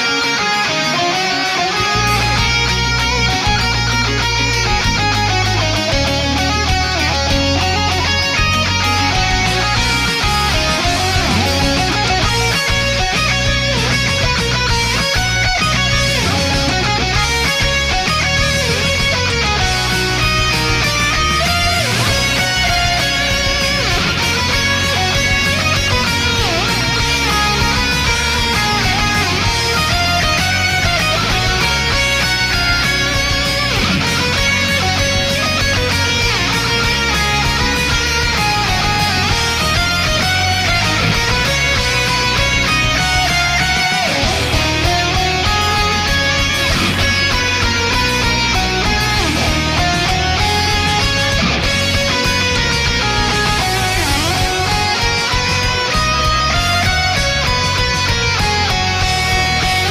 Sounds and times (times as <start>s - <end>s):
Music: 0.0s - 59.9s.